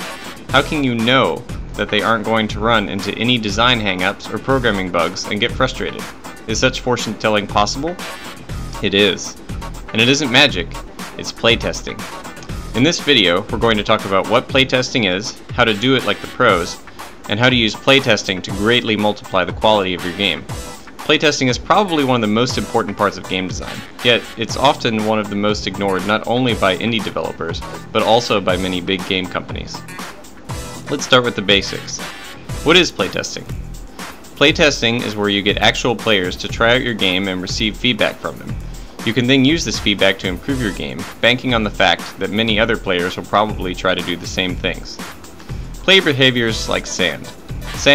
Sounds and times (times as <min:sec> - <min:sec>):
Music: 0:00.0 - 0:47.9
Speech: 0:00.5 - 0:08.0, 0:08.8 - 0:12.1, 0:12.8 - 0:29.9, 0:30.9 - 0:33.6, 0:34.4 - 0:45.0, 0:45.8 - 0:47.9.